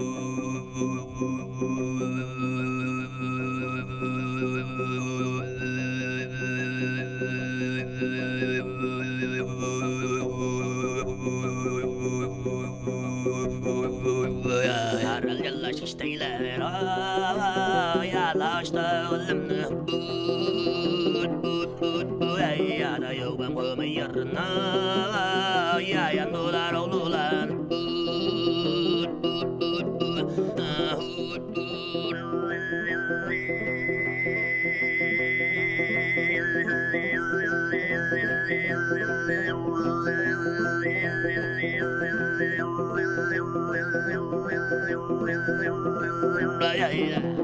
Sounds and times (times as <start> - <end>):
Music: 0.0 - 47.4
Singing: 0.0 - 47.4.